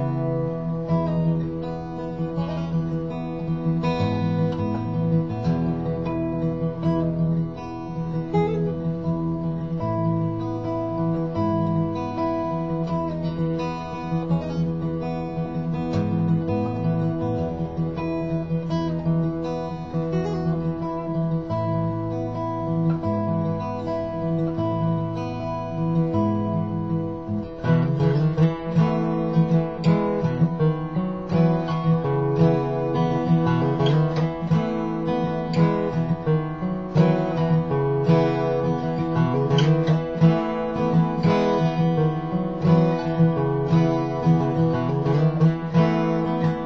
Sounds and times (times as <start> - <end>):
Acoustic guitar: 0.0 - 46.6
Strum: 0.0 - 46.6.